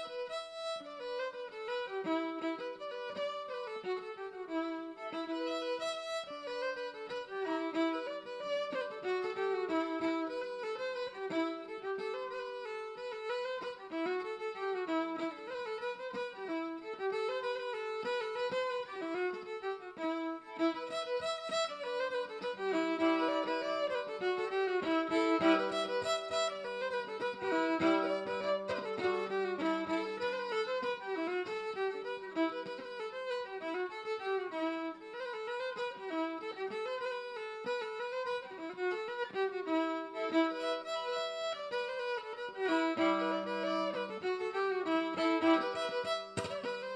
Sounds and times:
Violin, fiddle: 0.0s - 46.9s.

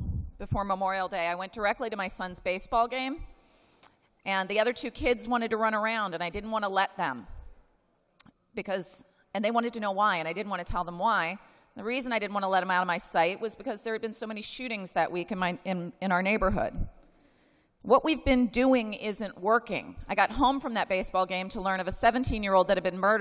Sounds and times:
Female speech, woman speaking: 0.4s - 3.2s, 4.3s - 7.2s, 8.6s - 16.8s, 17.9s - 23.2s.

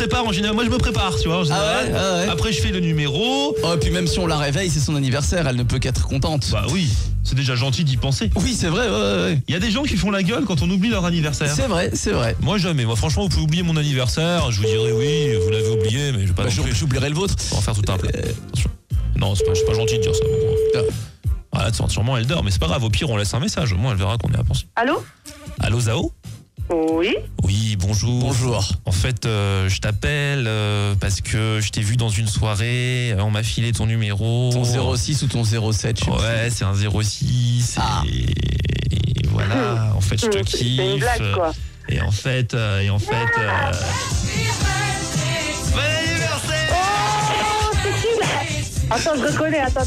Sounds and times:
Speech: 0.0s - 20.9s, 21.5s - 25.0s, 25.6s - 26.1s, 26.7s - 43.9s
Music: 0.0s - 49.8s.

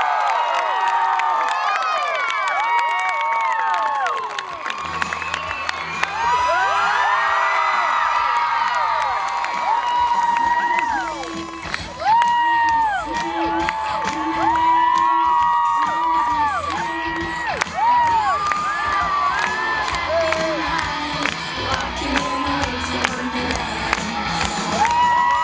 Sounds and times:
Music: 4.3s - 25.4s.

